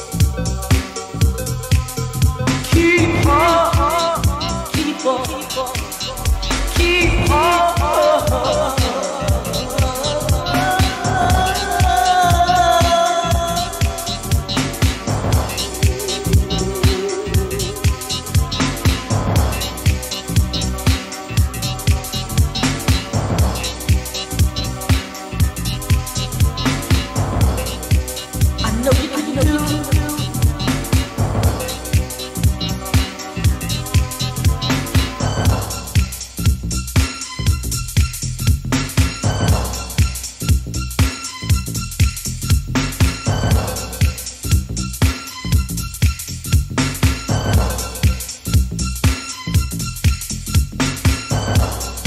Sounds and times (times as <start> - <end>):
Disco: 0.0 - 52.0
Electronic music: 0.0 - 52.0.